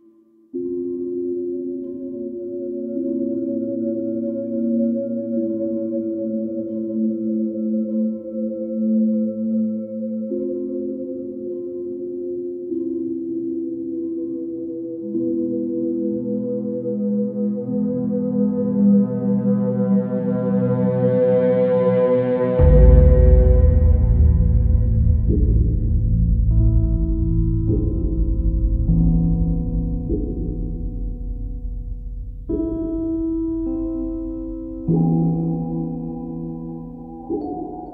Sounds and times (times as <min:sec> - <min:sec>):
Singing bowl: 0:00.6 - 0:37.9.